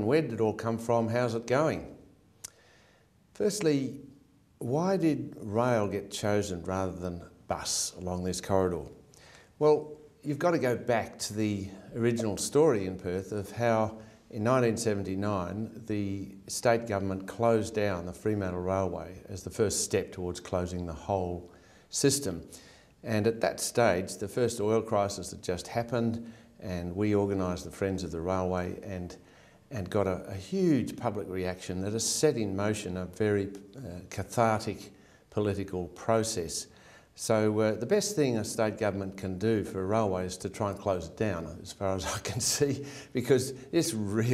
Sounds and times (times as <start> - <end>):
Speech: 0.0 - 2.0, 3.4 - 4.0, 4.6 - 9.0, 9.6 - 44.3.